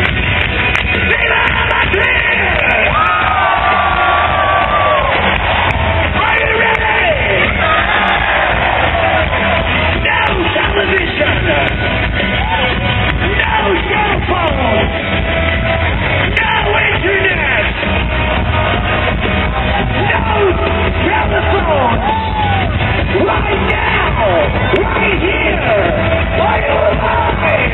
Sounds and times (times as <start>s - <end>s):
Music: 0.0s - 27.7s
Speech: 10.0s - 11.7s, 20.0s - 22.0s.